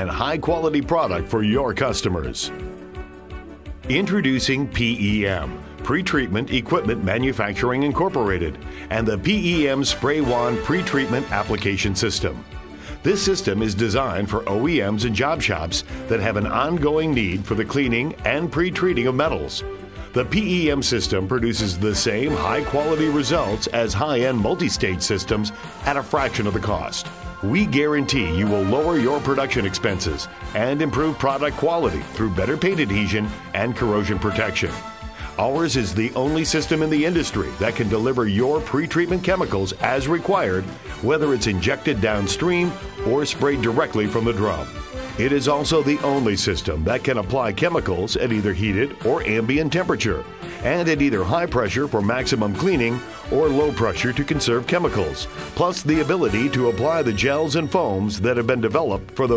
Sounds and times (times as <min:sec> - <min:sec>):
Speech: 0:00.0 - 0:02.6, 0:03.9 - 0:12.4, 0:13.0 - 0:19.6, 0:20.2 - 0:34.8, 0:35.4 - 0:59.3
Music: 0:00.0 - 0:59.3.